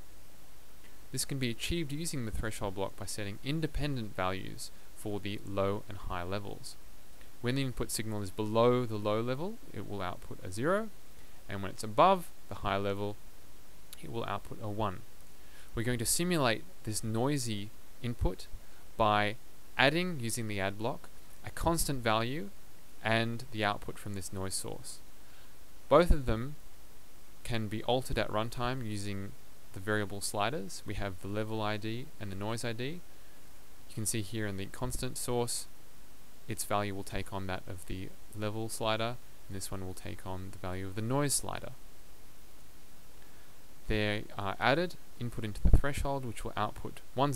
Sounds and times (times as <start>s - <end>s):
Speech: 1.1s - 6.8s, 7.4s - 13.2s, 14.0s - 15.1s, 15.8s - 25.0s, 25.9s - 26.6s, 27.4s - 33.0s, 33.9s - 35.7s, 36.5s - 41.8s, 43.9s - 47.3s.